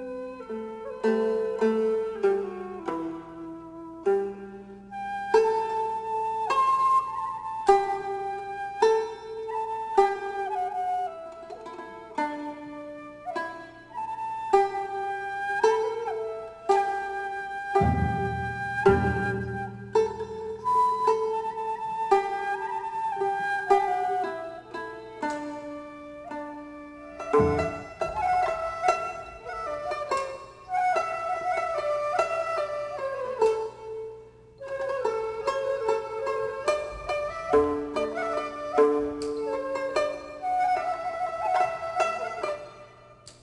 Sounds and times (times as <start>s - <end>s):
Traditional music: 0.0s - 43.3s.